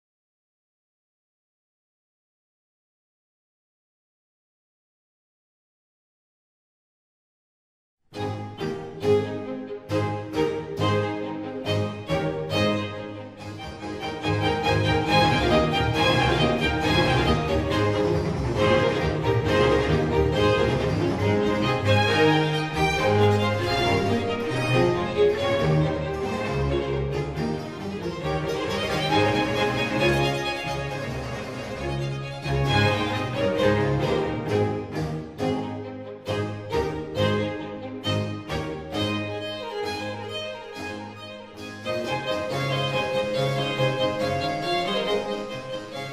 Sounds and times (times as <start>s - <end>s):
Violin, fiddle: 8.2s - 46.1s.